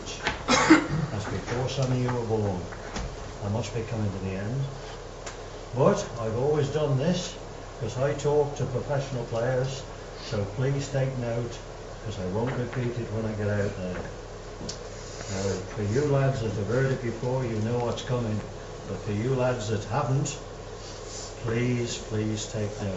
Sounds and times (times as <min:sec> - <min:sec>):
Male speech, man speaking: 0:00.0 - 0:00.3, 0:01.1 - 0:02.8, 0:03.4 - 0:04.8, 0:05.8 - 0:14.2, 0:15.3 - 0:20.5, 0:21.4 - 0:22.9
Narration, monologue: 0:00.0 - 0:22.9.